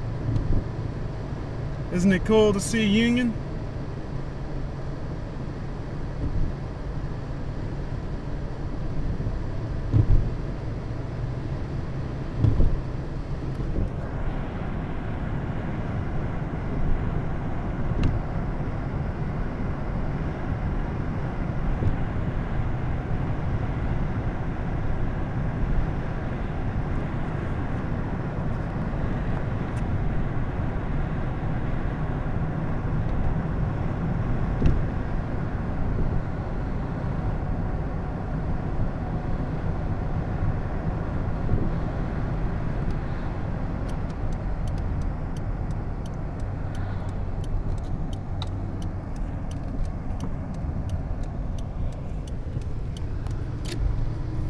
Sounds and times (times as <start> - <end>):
Car: 0.0 - 54.4.